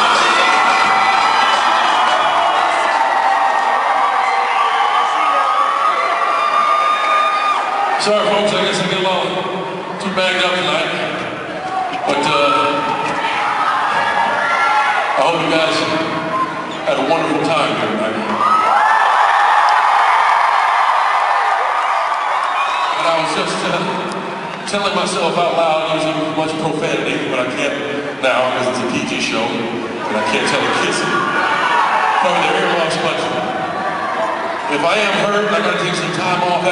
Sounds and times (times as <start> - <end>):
Male speech, man speaking: 8.0 - 11.2, 12.1 - 12.9, 15.2 - 16.1, 16.8 - 18.2, 23.0 - 24.0, 24.7 - 31.2, 32.2 - 33.4, 34.7 - 36.7.